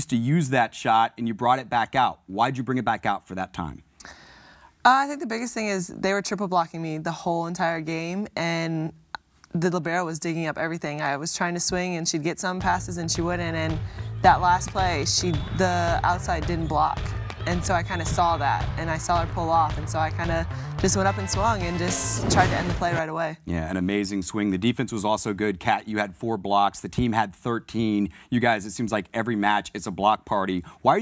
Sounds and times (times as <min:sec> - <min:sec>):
Speech: 0:17.5 - 0:31.0.